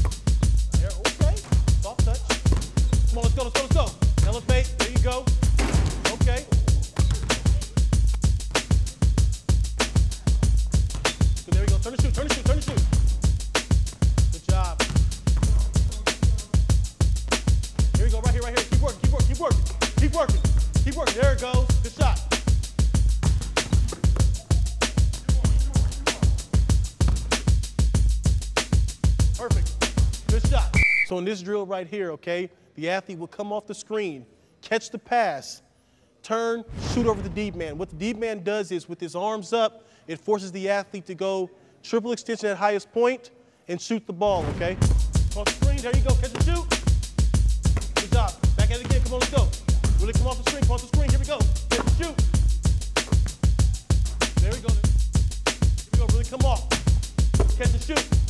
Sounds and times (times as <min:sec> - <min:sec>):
Music: 0:00.0 - 0:30.8, 0:44.6 - 0:58.2
Speech: 0:00.7 - 0:02.3, 0:03.1 - 0:05.3, 0:06.0 - 0:07.7, 0:11.5 - 0:12.8, 0:14.3 - 0:14.9, 0:18.0 - 0:22.3, 0:29.4 - 0:29.7, 0:30.3 - 0:35.6, 0:36.2 - 0:46.7, 0:48.0 - 0:52.2, 0:54.4 - 0:54.9, 0:56.0 - 0:56.7, 0:57.6 - 0:58.1.